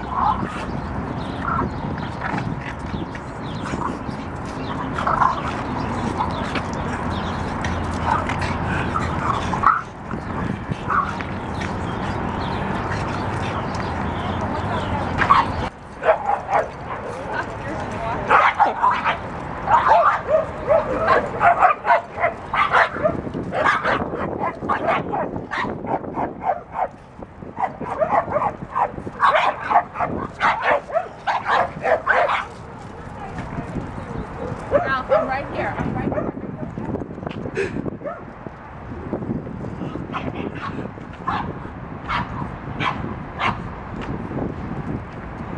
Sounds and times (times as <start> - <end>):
Speech: 17.0 - 18.5, 32.9 - 36.3
Bow-wow: 18.3 - 26.9, 27.6 - 32.6, 42.1 - 43.6
Yip: 18.3 - 26.9.